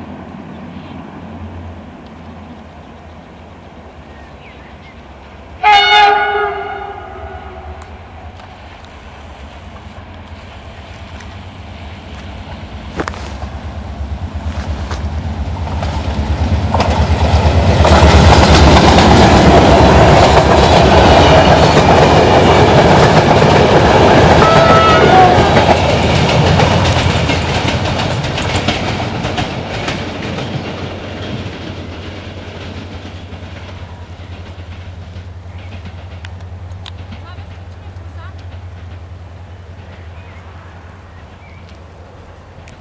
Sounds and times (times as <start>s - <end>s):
Railroad car, train wagon: 0.0s - 42.8s
Train: 0.0s - 42.8s
Clickety-clack: 14.4s - 39.1s.